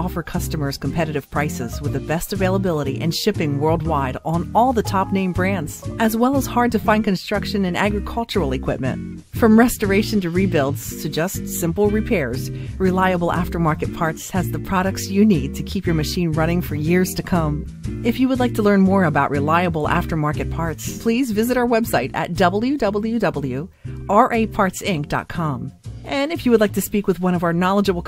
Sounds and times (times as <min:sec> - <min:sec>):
Music: 0:00.0 - 0:28.0
Speech: 0:00.0 - 0:28.0.